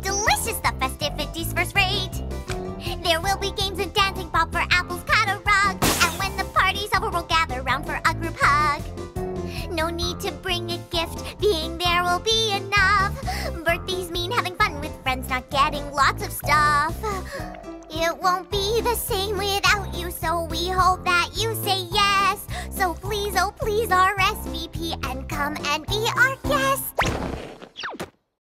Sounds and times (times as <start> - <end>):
Child singing: 0.0 - 2.2, 2.9 - 8.9, 9.6 - 17.2, 17.9 - 26.9
Music: 0.0 - 27.1.